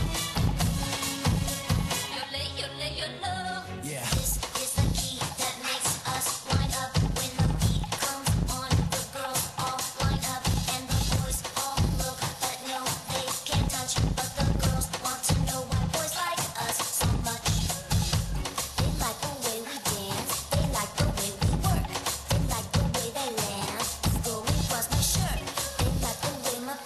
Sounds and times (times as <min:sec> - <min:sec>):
Music: 0:00.0 - 0:26.8.